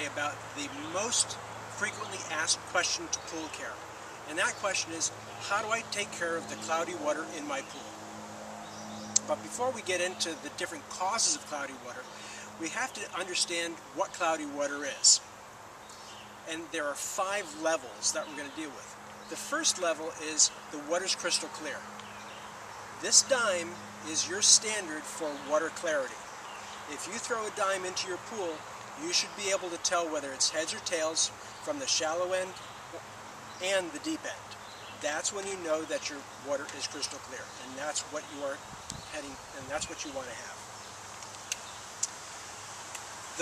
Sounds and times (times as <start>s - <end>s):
Speech: 0.0s - 7.9s, 9.2s - 15.2s, 16.5s - 21.9s, 23.0s - 26.2s, 26.9s - 32.6s, 33.6s - 40.6s.